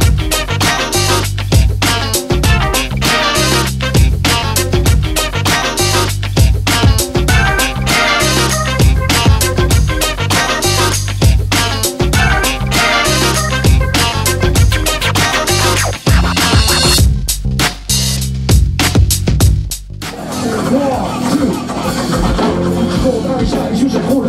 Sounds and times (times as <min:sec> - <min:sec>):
Music: 0:00.0 - 0:24.2.